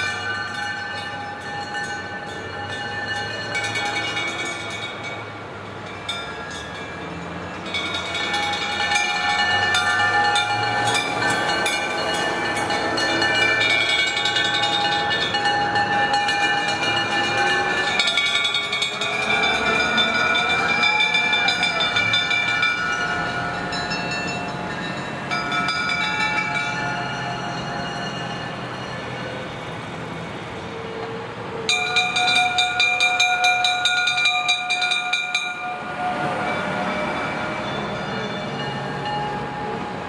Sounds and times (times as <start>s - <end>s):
Vehicle: 0.0s - 40.0s.